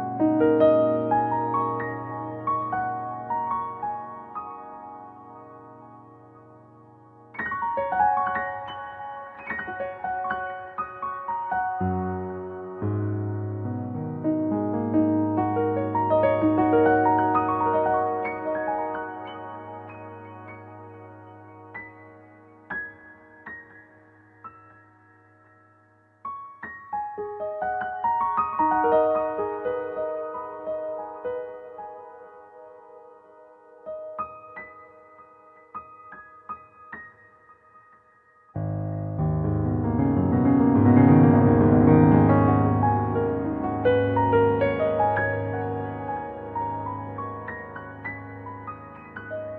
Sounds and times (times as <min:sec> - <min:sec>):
Music: 0:00.0 - 0:49.5.